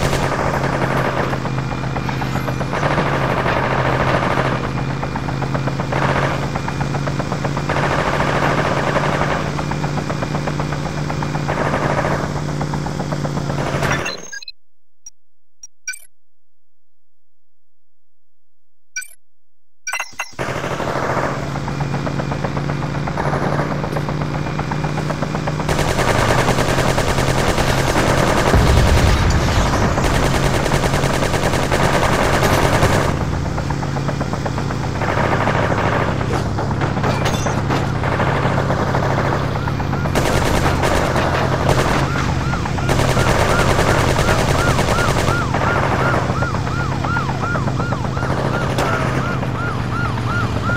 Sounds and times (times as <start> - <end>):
Car: 0.0 - 14.4, 20.2 - 50.7
Gunshot, gunfire: 28.4 - 33.1.